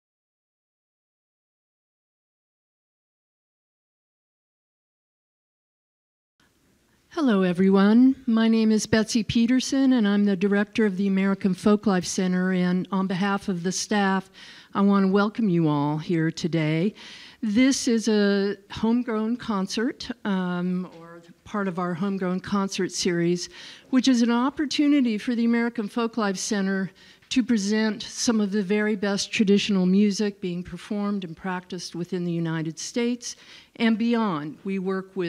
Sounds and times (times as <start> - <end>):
Speech: 7.2 - 35.2.